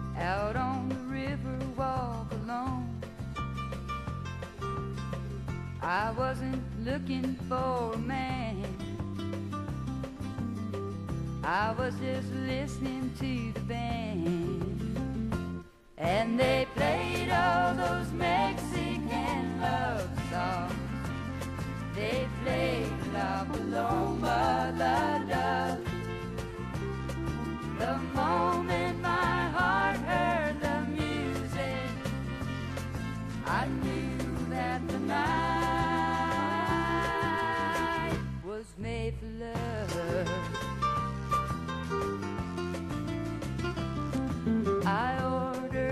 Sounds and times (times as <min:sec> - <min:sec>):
Country: 0:00.0 - 0:45.9.